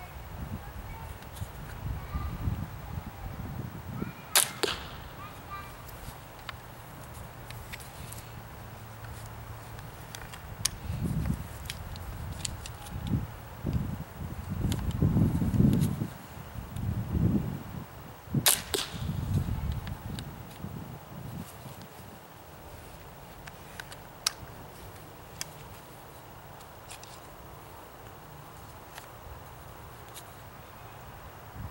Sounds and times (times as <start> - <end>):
Speech: 0.0 - 1.2, 5.2 - 5.9
Outside, rural or natural: 0.0 - 31.7.